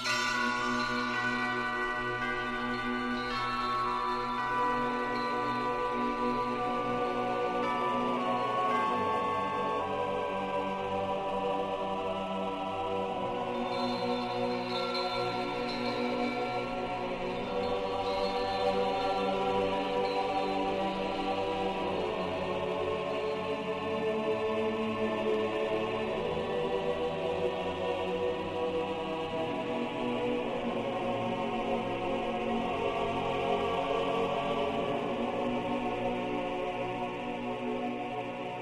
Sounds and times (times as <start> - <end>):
New-age music: 0.0 - 38.6.